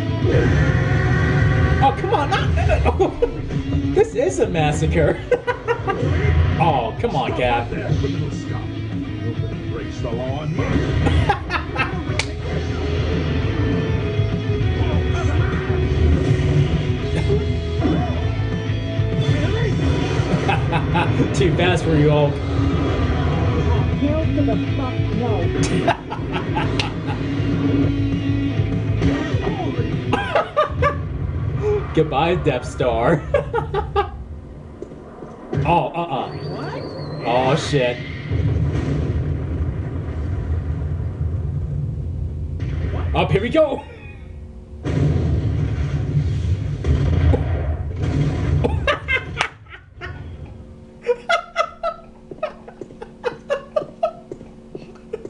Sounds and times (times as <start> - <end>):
Rumble: 0.0 - 55.2
Speech: 35.7 - 38.0.